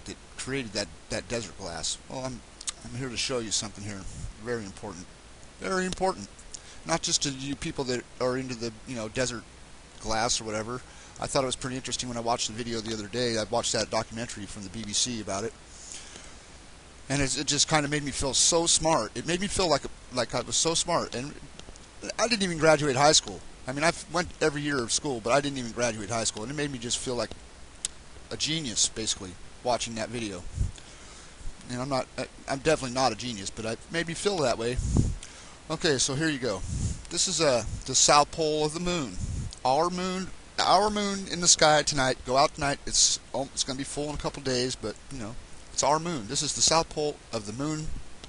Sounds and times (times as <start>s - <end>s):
Speech: 0.0s - 6.3s, 6.9s - 9.4s, 10.0s - 15.6s, 17.1s - 27.4s, 28.3s - 30.5s, 31.7s - 34.8s, 35.7s - 47.9s.